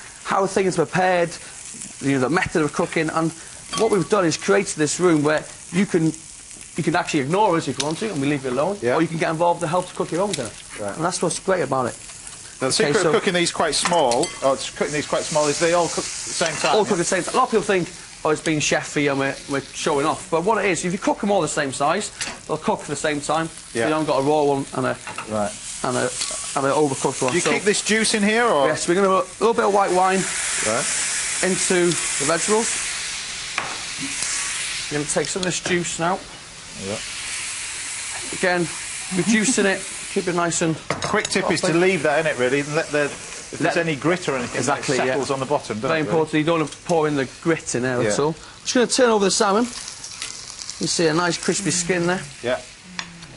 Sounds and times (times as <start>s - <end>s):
Frying (food): 0.0s - 53.3s
Sizzle: 0.0s - 53.3s.